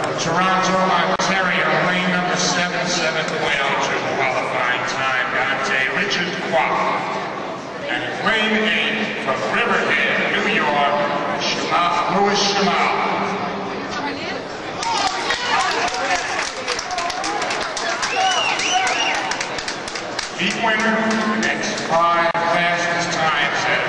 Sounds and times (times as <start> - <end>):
Speech: 0.0 - 7.2, 7.8 - 17.4, 20.4 - 23.8.